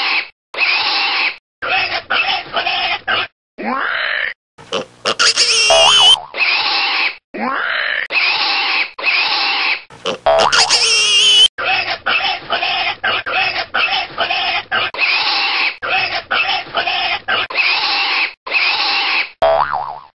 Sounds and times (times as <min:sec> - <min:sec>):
Oink: 0:03.2 - 0:11.1, 0:13.8 - 0:15.8, 0:16.8 - 0:19.4.